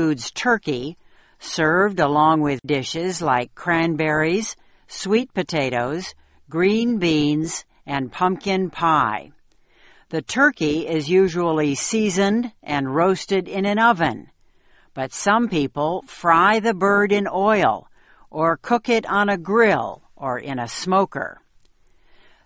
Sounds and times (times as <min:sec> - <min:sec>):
Speech: 0:00.0 - 0:09.4, 0:10.1 - 0:14.3, 0:15.0 - 0:21.4.